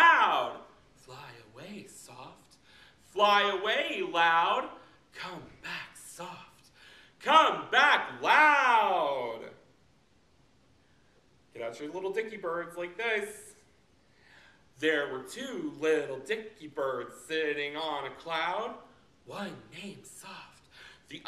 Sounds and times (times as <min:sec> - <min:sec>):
Speech: 0:00.0 - 0:09.6, 0:11.5 - 0:13.7, 0:14.8 - 0:21.2.